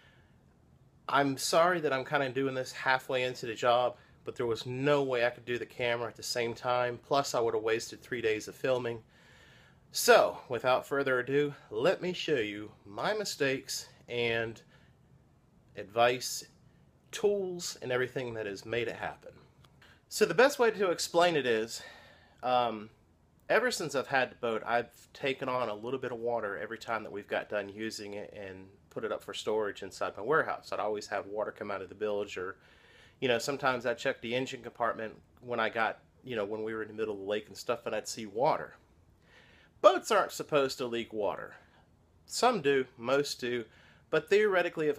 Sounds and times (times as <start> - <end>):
Speech: 1.1 - 9.0, 10.0 - 14.6, 15.8 - 19.4, 20.1 - 32.6, 33.2 - 38.8, 39.8 - 41.6, 42.3 - 44.9.